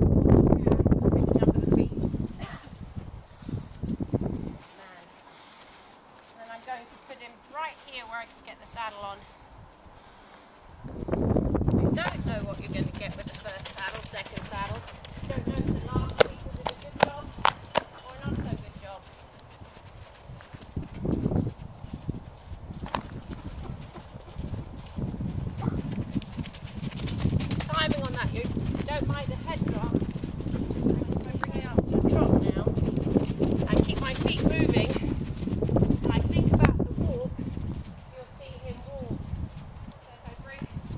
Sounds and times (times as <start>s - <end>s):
Speech: 6.4s - 9.2s, 11.9s - 17.3s, 18.0s - 19.0s, 27.7s - 29.9s, 31.2s - 32.7s, 33.7s - 35.0s, 36.1s - 37.3s, 38.2s - 39.1s, 40.1s - 40.6s.